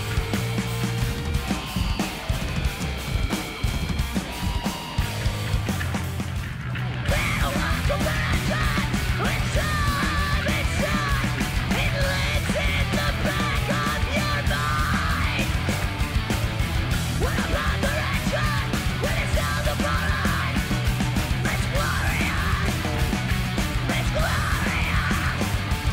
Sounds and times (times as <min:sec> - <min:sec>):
Music: 0:00.0 - 0:25.9.